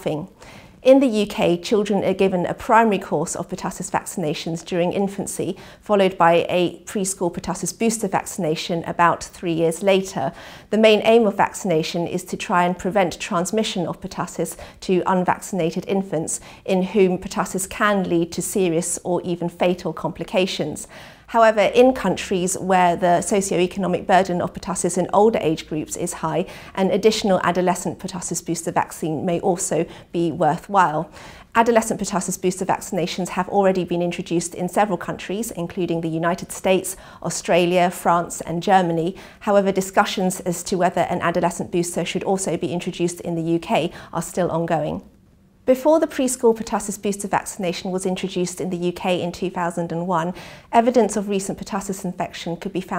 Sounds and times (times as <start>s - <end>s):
Speech: 0.0s - 45.1s, 45.7s - 52.9s.